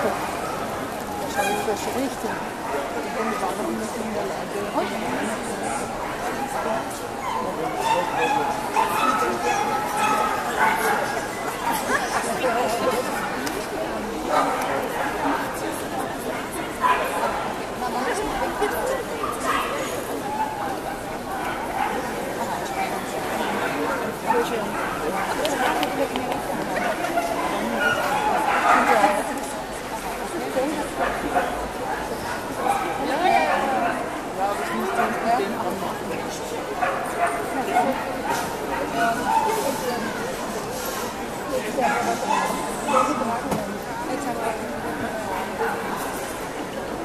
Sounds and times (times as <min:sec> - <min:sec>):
Speech: 0:00.0 - 0:47.0.